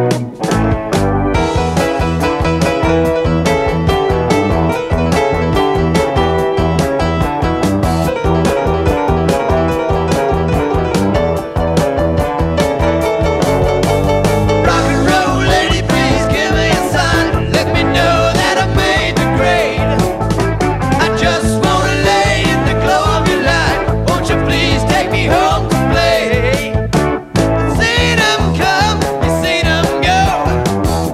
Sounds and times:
Rock and roll: 0.0 - 31.1.

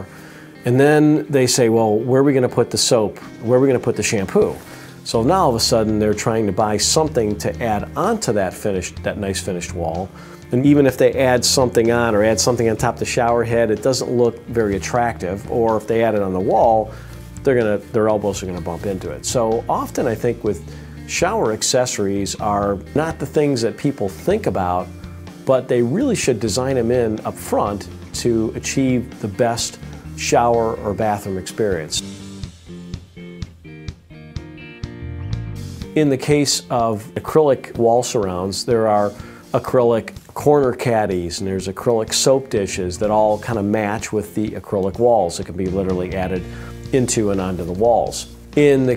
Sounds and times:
Music: 0.0 - 48.9
Speech: 0.6 - 32.1, 36.0 - 48.9.

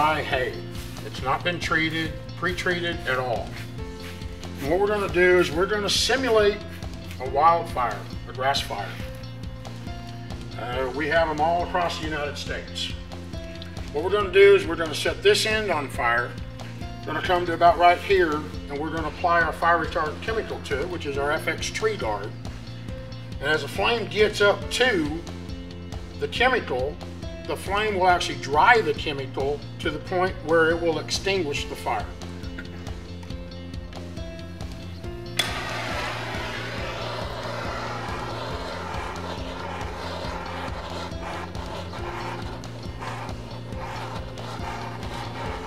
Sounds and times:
Speech: 0.0 - 3.5, 4.6 - 6.6, 7.2 - 9.0, 10.6 - 13.0, 13.9 - 16.4, 17.1 - 22.3, 23.4 - 25.2, 26.2 - 32.1
Music: 0.0 - 45.6.

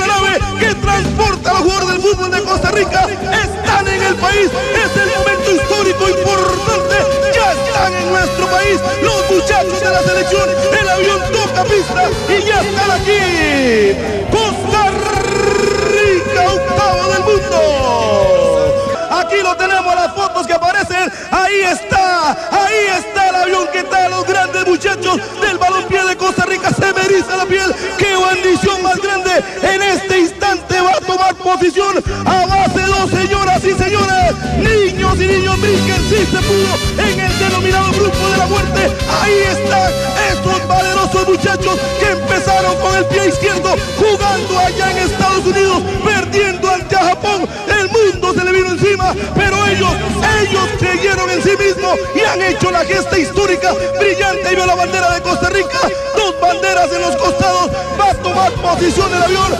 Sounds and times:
Music: 0.0 - 59.5
Speech: 0.0 - 59.5.

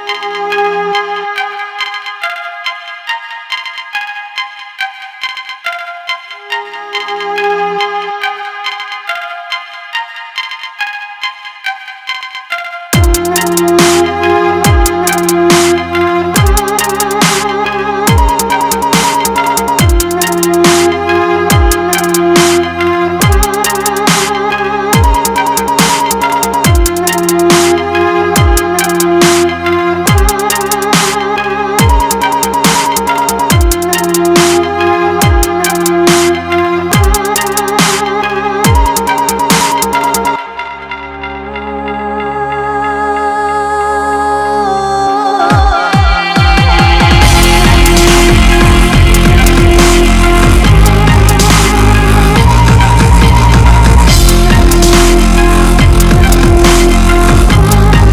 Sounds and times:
Soundtrack music: 0.0 - 58.1.

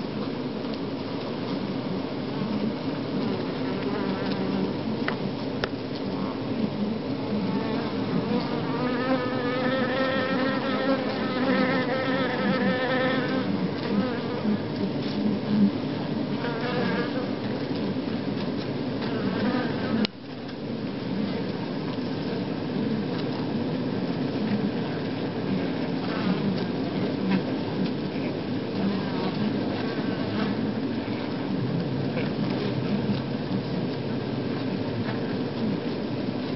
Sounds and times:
Bee, wasp, etc.: 1.6 - 18.2, 18.9 - 20.2, 24.4 - 33.0.

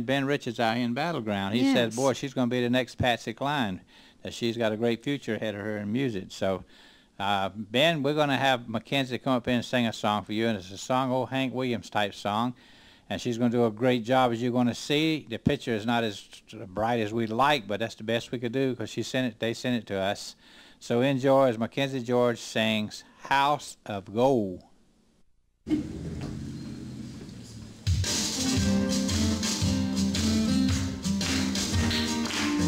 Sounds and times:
Speech: 0.0 - 24.7.

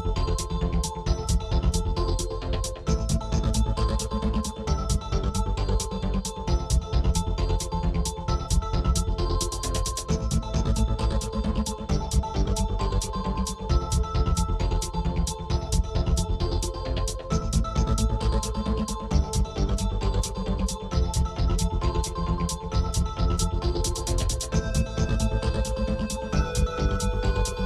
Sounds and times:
Music: 0.0 - 27.6.

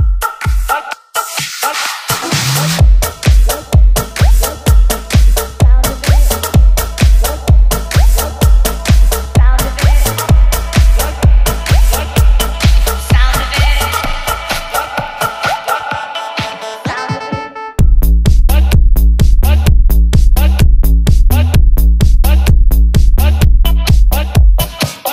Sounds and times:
Music: 0.0 - 25.1.

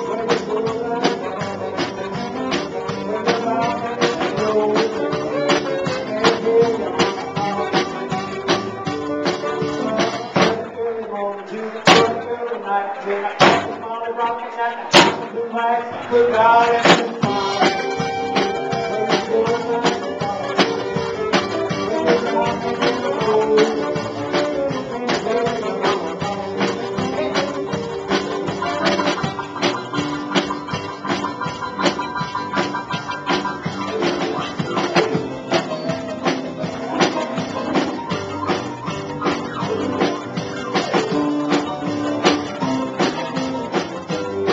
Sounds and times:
Rock and roll: 0.0 - 44.5.

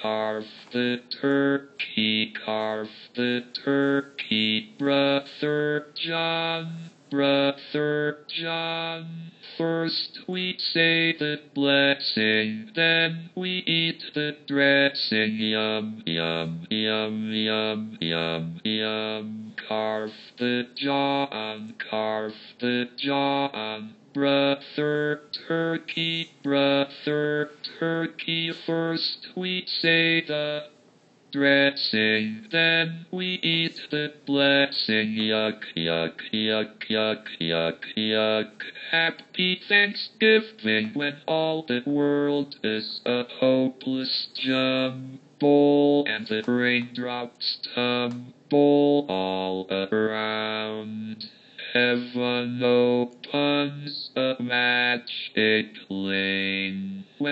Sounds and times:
Male singing: 0.0 - 57.3.

